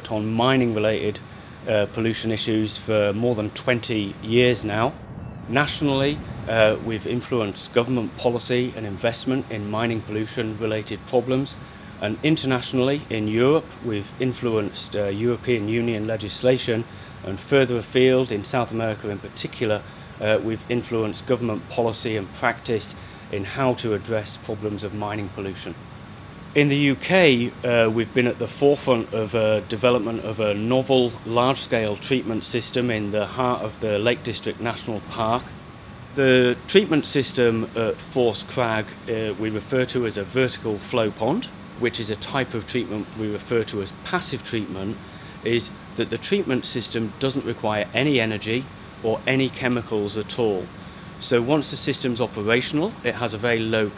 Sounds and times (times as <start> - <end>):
Speech: 0.0 - 25.8, 26.6 - 35.6, 36.2 - 53.9.